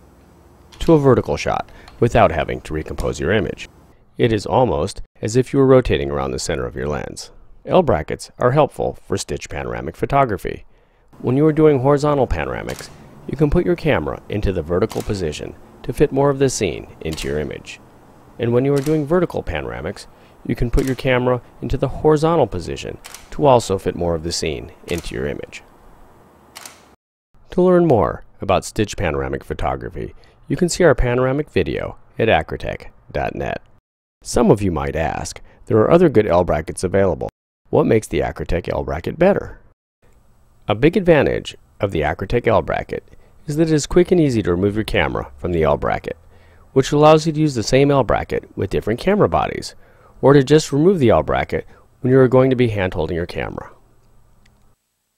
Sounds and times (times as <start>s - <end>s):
Speech: 0.8s - 17.8s, 18.4s - 25.7s, 27.5s - 39.7s, 40.7s - 46.2s, 46.8s - 53.8s.